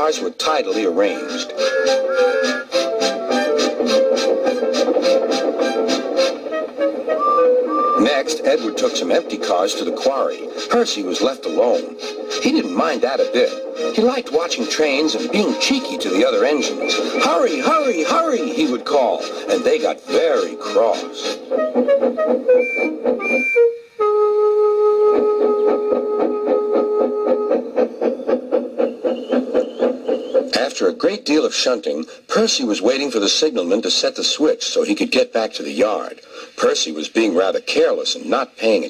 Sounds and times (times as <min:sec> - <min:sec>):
Speech: 0:00.0 - 0:01.5, 0:08.0 - 0:21.4, 0:30.5 - 0:38.9
Music: 0:00.7 - 0:09.4, 0:10.4 - 0:27.4.